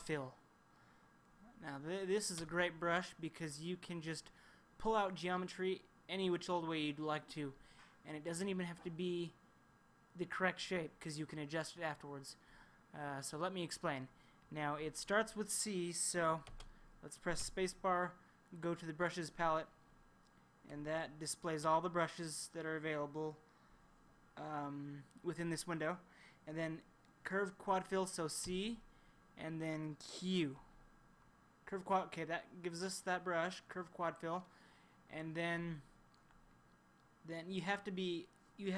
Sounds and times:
Speech: 0:00.0 - 0:00.4, 0:01.4 - 0:09.4, 0:10.2 - 0:19.7, 0:20.6 - 0:23.4, 0:24.4 - 0:30.7, 0:31.6 - 0:34.5, 0:35.1 - 0:36.0, 0:37.2 - 0:38.7.

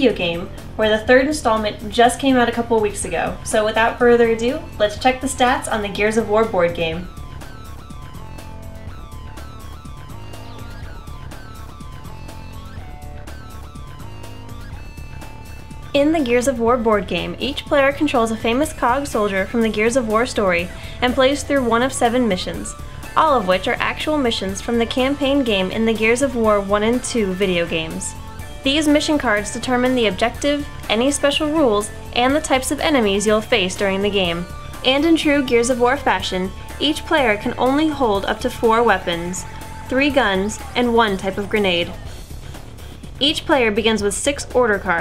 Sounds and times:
Speech: 0:00.0 - 0:07.1, 0:16.0 - 0:42.0, 0:43.2 - 0:45.0
Music: 0:00.0 - 0:45.0.

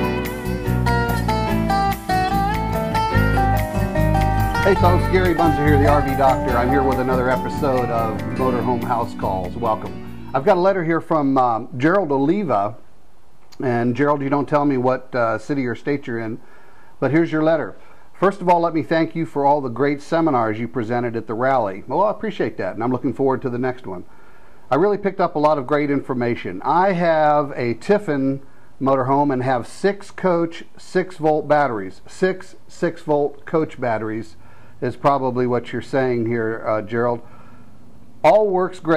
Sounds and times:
Speech: 0:04.6 - 0:12.8, 0:13.6 - 0:16.4, 0:17.0 - 0:24.1, 0:24.7 - 0:37.3, 0:38.2 - 0:38.9.

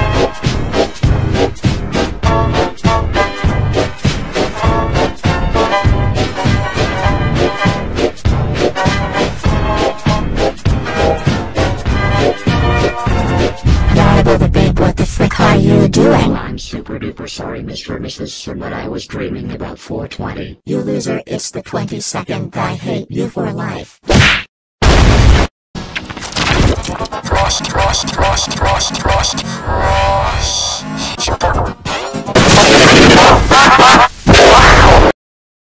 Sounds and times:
Music: 0:00.0 - 0:14.9, 0:26.0 - 0:34.0.

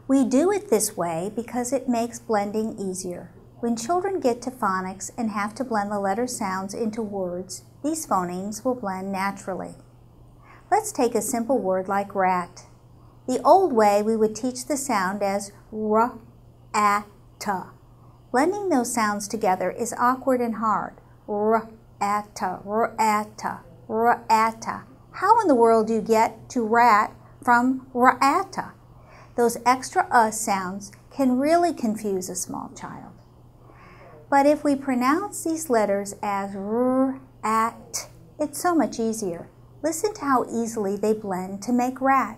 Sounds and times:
Speech: 0:00.1 - 0:09.8, 0:10.7 - 0:12.7, 0:13.3 - 0:17.7, 0:18.3 - 0:28.8, 0:29.4 - 0:33.2, 0:33.9 - 0:42.3.

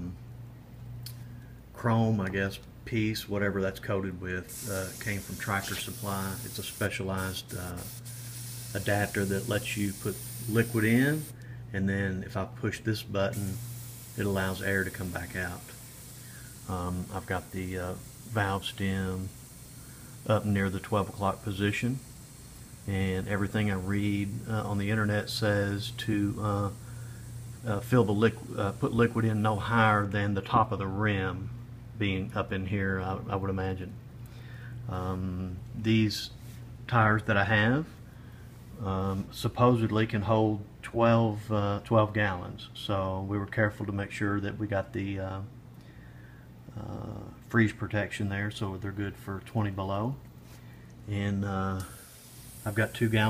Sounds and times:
Speech: 0:01.8 - 0:07.9, 0:08.8 - 0:13.6, 0:14.2 - 0:15.7, 0:16.7 - 0:19.3, 0:20.3 - 0:22.0, 0:22.9 - 0:26.8, 0:27.6 - 0:34.0, 0:34.9 - 0:38.0, 0:38.8 - 0:45.5, 0:46.8 - 0:50.2, 0:51.1 - 0:51.9, 0:52.7 - 0:53.3
Spray: 0:04.5 - 0:11.4, 0:13.3 - 0:30.1, 0:51.8 - 0:53.3.

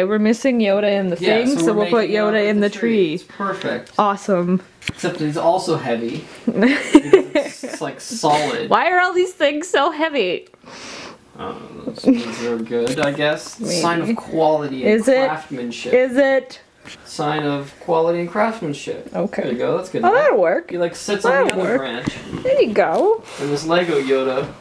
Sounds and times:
Speech: 0:00.1 - 0:02.9, 0:07.4 - 0:09.2, 0:11.4 - 0:16.0, 0:17.1 - 0:24.6.

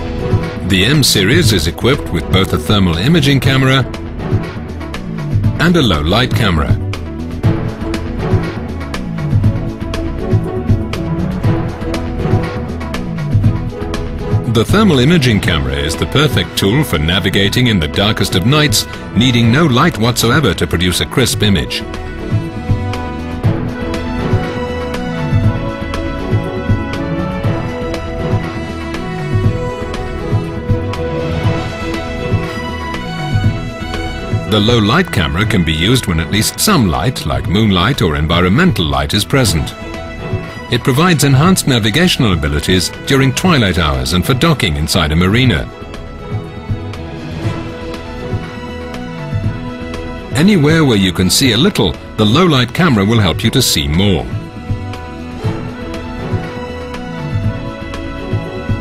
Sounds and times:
Music: 0:00.0 - 0:58.8
Speech: 0:00.6 - 0:03.9, 0:05.6 - 0:06.8, 0:14.5 - 0:21.8, 0:34.5 - 0:39.8, 0:40.7 - 0:45.7, 0:50.4 - 0:54.4.

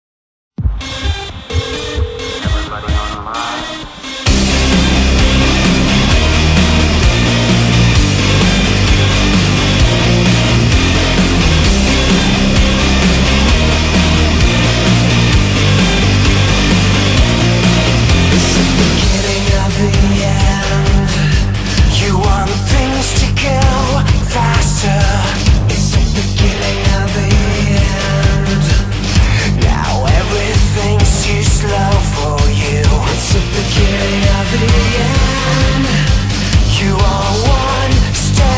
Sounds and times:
Music: 0:00.6 - 0:38.5.

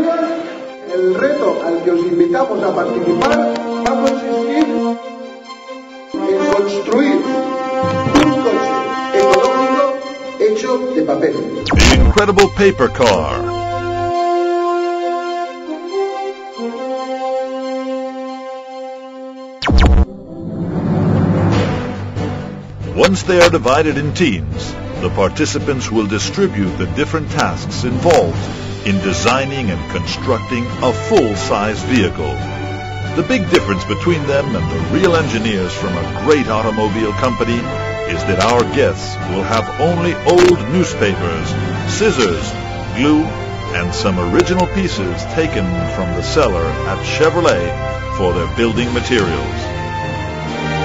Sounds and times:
Speech: 0:00.0 - 0:04.8, 0:06.2 - 0:07.5, 0:08.2 - 0:13.5, 0:23.0 - 0:32.4, 0:33.2 - 0:49.6
Music: 0:00.0 - 0:50.8.

